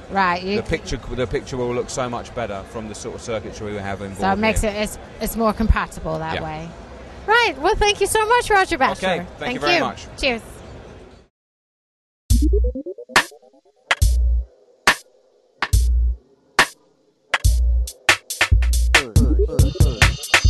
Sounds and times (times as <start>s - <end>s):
Music: 12.3s - 15.0s, 15.6s - 16.8s, 17.4s - 20.4s.